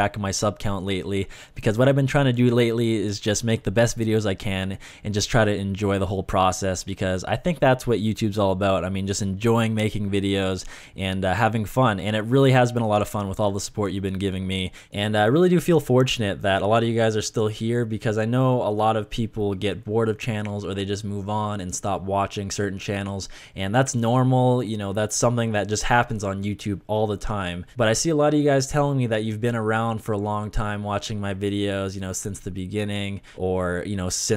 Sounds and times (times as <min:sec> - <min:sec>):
Speech: 0:00.0 - 0:34.3.